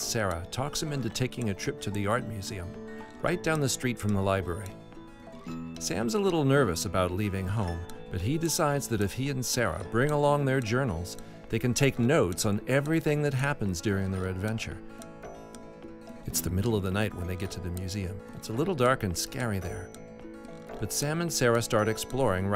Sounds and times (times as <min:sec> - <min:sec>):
Speech: 0:00.0 - 0:04.7, 0:05.8 - 0:14.8, 0:16.3 - 0:19.9, 0:20.8 - 0:22.5
Music: 0:00.0 - 0:22.5.